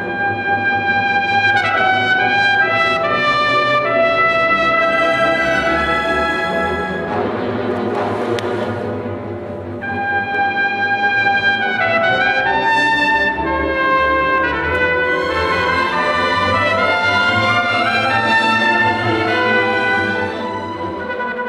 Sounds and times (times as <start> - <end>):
Trumpet: 0.0 - 21.4.